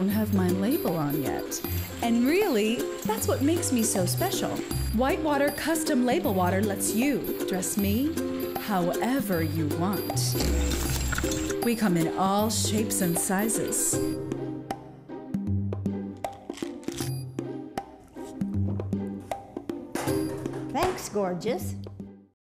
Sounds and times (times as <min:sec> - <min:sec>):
Music: 0:00.0 - 0:22.4
Speech: 0:20.8 - 0:21.8.